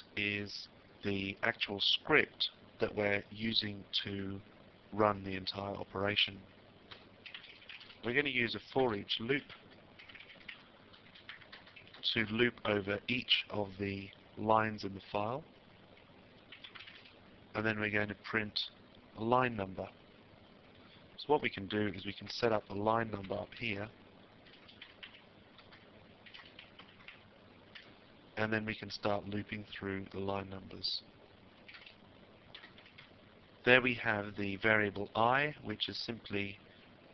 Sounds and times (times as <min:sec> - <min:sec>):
Speech: 0:00.0 - 0:06.5, 0:08.0 - 0:09.6, 0:12.0 - 0:15.5, 0:17.6 - 0:20.0, 0:21.2 - 0:24.0, 0:28.4 - 0:31.1, 0:33.6 - 0:36.6.